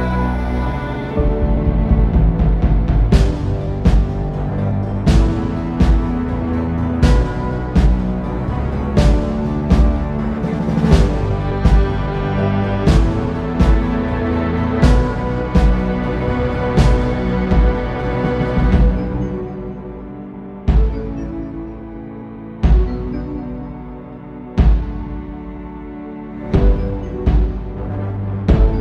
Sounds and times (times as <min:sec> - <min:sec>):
Music: 0:00.0 - 0:28.8.